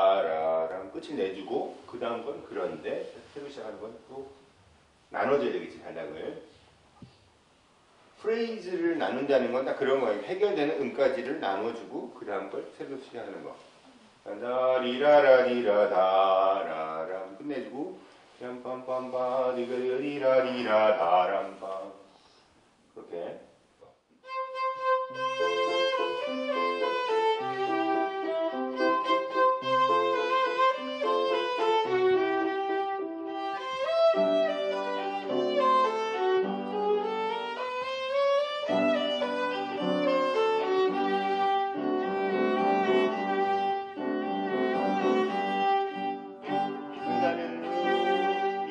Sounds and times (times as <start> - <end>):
Speech: 0.0 - 4.4, 5.1 - 6.5, 8.2 - 13.6, 14.2 - 22.1, 23.0 - 23.5, 47.1 - 48.7
Classical music: 24.2 - 48.7
Violin, fiddle: 24.2 - 48.7.